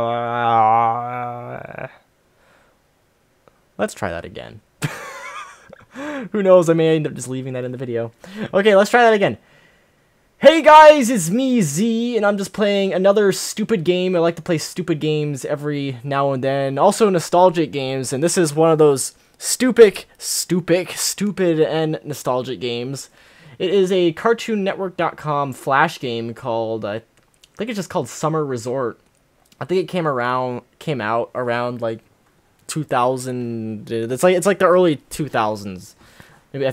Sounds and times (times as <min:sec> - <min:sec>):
Speech: 0:00.0 - 0:02.0, 0:03.8 - 0:04.6, 0:06.3 - 0:09.4, 0:10.4 - 0:29.0, 0:29.6 - 0:32.1, 0:32.7 - 0:36.7.